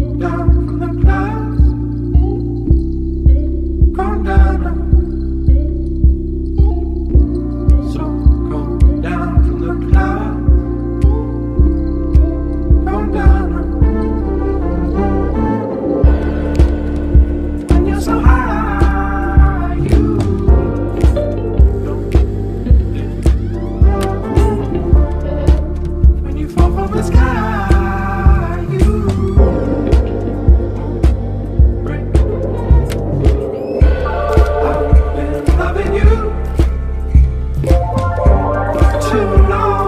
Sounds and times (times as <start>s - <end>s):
Music: 0.0s - 39.8s.